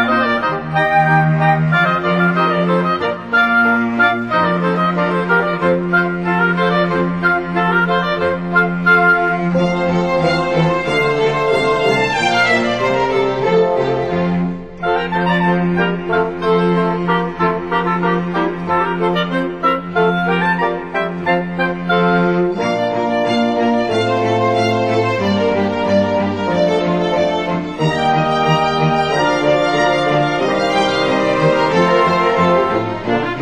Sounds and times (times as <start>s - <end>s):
Music: 0.0s - 33.4s.